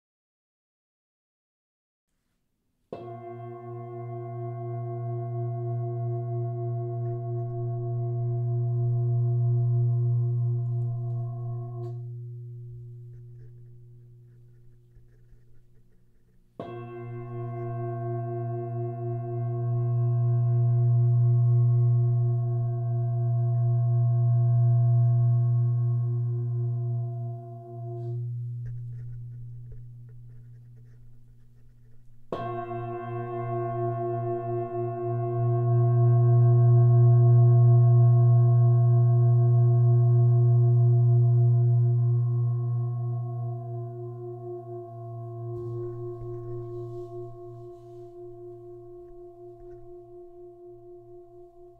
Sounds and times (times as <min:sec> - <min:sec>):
Gong: 0:02.9 - 0:15.4, 0:16.2 - 0:31.0, 0:31.6 - 0:51.7
Singing bowl: 0:03.0 - 0:15.4, 0:16.2 - 0:51.7.